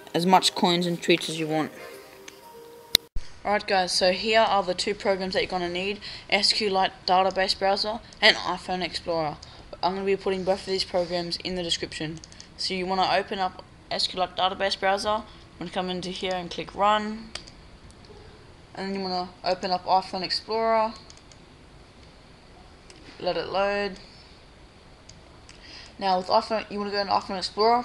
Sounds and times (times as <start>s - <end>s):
Speech: 0.0s - 1.8s, 3.5s - 17.3s, 18.8s - 21.1s, 23.2s - 24.0s, 26.0s - 27.8s
Music: 0.0s - 3.1s.